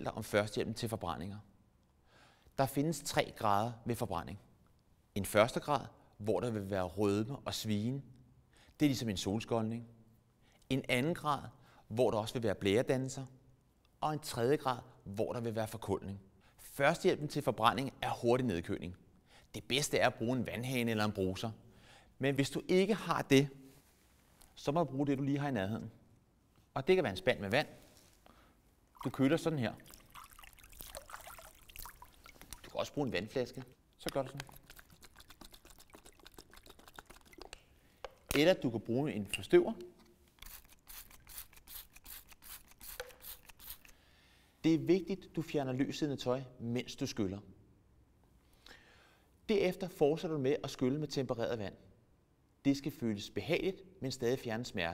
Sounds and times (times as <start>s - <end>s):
Speech: 0.0s - 1.5s, 2.6s - 4.4s, 5.2s - 8.1s, 8.8s - 9.9s, 10.7s - 13.4s, 14.0s - 21.6s, 22.2s - 23.6s, 24.6s - 26.0s, 26.7s - 27.8s, 29.0s - 29.8s, 32.7s - 34.5s, 38.3s - 39.9s, 44.6s - 47.5s, 49.5s - 51.8s, 52.6s - 54.9s.